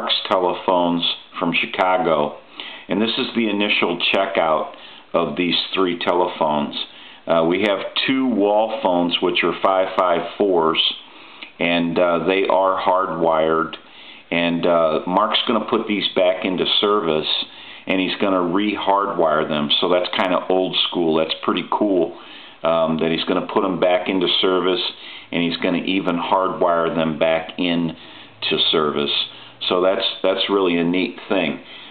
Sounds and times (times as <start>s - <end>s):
Speech: 0.0s - 31.7s.